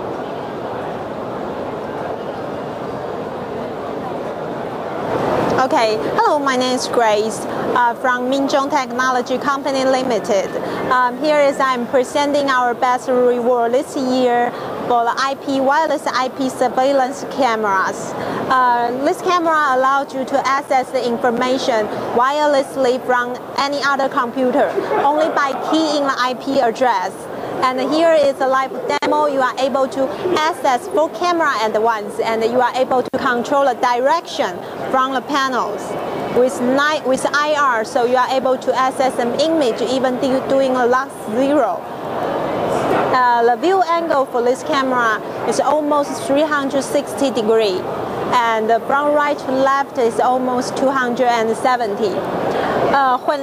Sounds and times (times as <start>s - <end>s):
Speech: 5.6s - 41.8s, 42.8s - 52.2s, 52.9s - 53.4s.